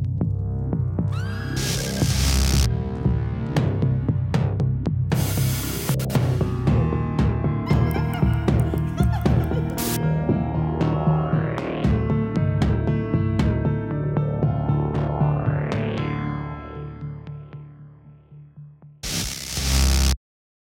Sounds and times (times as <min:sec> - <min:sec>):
Soundtrack music: 0:00.0 - 0:19.8.